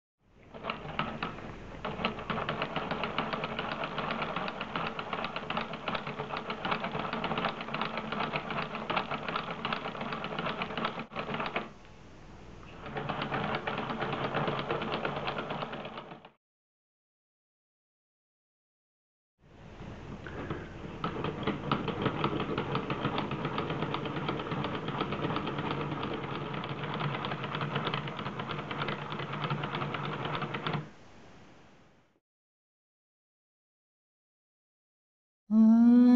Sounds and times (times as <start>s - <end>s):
Inside, small room: 0.2s - 16.4s, 19.4s - 32.2s, 35.5s - 36.1s.